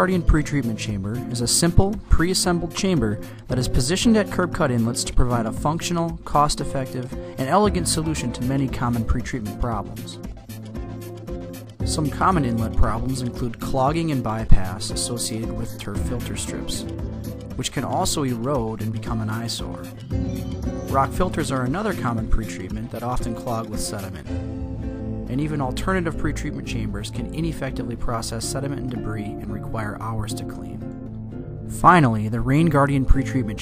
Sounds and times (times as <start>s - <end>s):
Speech: 0.0s - 10.2s, 11.9s - 16.9s, 17.6s - 20.0s, 20.9s - 24.3s, 25.3s - 30.8s, 31.7s - 33.6s
Music: 0.0s - 33.6s.